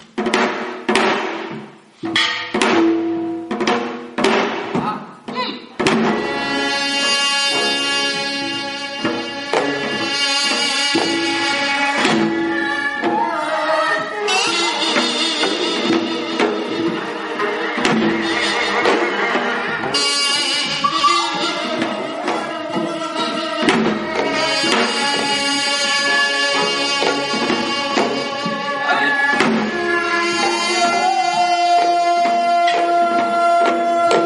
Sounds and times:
Traditional music: 0.0 - 34.2
Orchestra: 5.8 - 34.2.

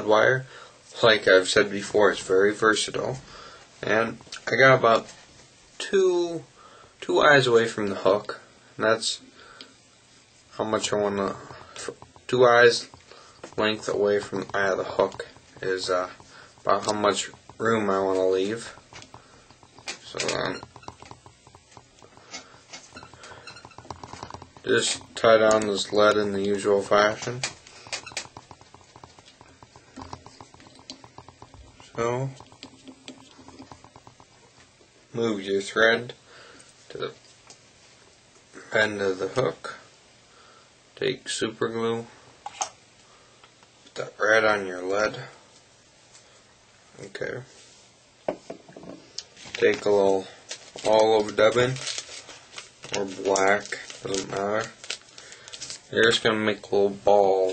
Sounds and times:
Speech: 0.0 - 3.2, 3.8 - 5.1, 5.8 - 9.3, 10.6 - 12.9, 13.6 - 18.8, 20.0 - 20.6, 24.6 - 27.5, 31.9 - 32.4, 35.1 - 36.2, 36.9 - 37.2, 38.6 - 39.9, 41.0 - 42.2, 43.9 - 45.4, 47.0 - 47.5, 49.6 - 51.8, 52.9 - 54.8, 55.9 - 57.5.

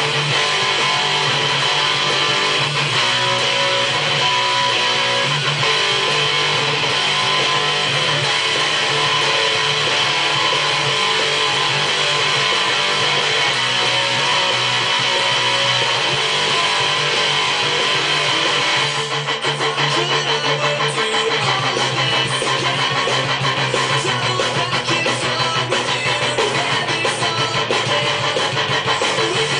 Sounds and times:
Bass guitar: 0.0 - 29.6
Electric guitar: 0.0 - 29.6.

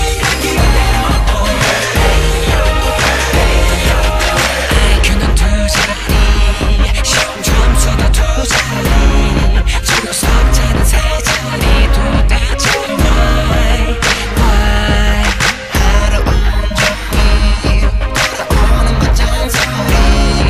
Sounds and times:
Music: 0.0 - 20.4
Singing: 0.0 - 20.4.

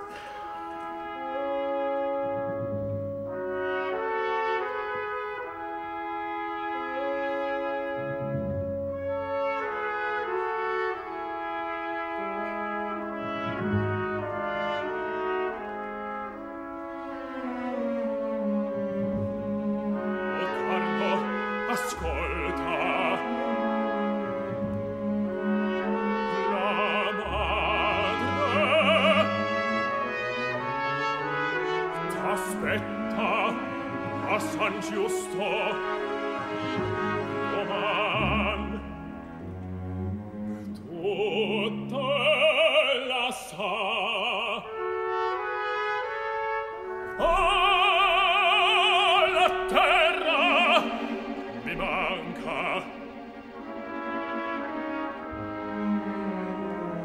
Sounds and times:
Opera: 0.0 - 57.0
Male singing: 20.4 - 23.5, 26.2 - 29.4, 32.0 - 36.0, 37.4 - 38.9, 40.8 - 44.8, 47.2 - 53.0.

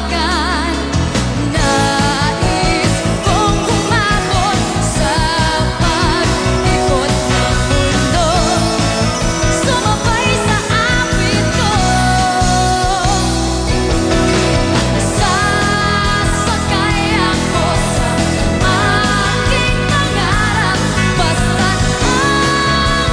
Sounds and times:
Dance music: 0.0 - 23.1.

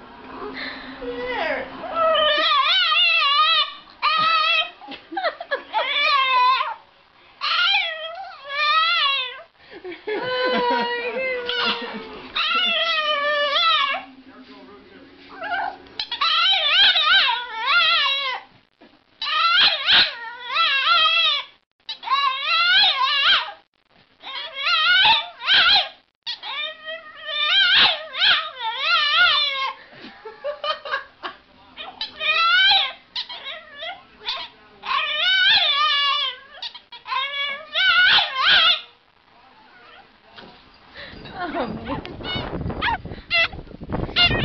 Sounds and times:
Speech: 14.0 - 15.4, 41.3 - 42.2.

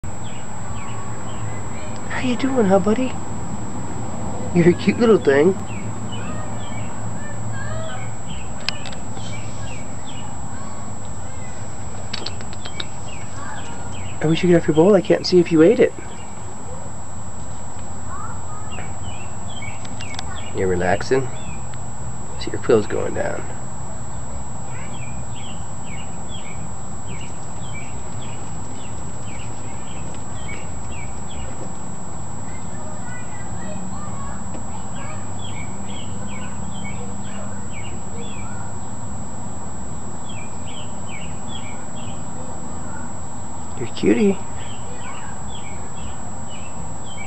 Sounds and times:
Bird: 5.1 - 10.4, 11.3 - 14.9, 18.1 - 21.7, 24.7 - 31.6, 35.0 - 38.9, 40.2 - 43.1, 43.8 - 47.2.

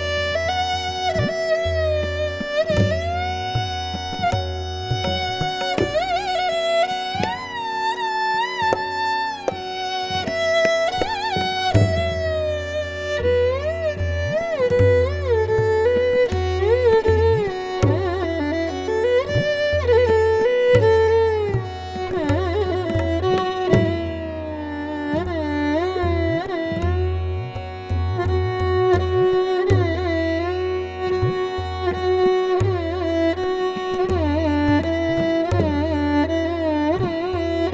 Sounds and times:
Tabla: 0.0 - 37.7
Violin, fiddle: 0.0 - 37.7.

